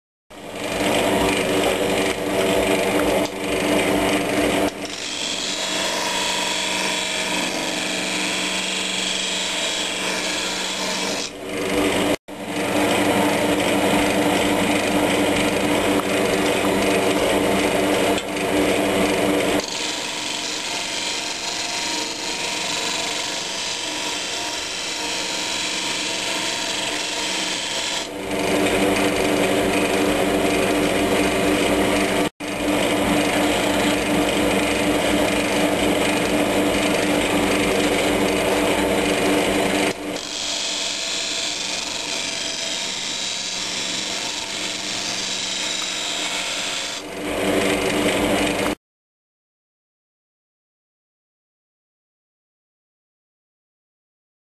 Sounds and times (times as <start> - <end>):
Power tool: 0.3 - 48.8.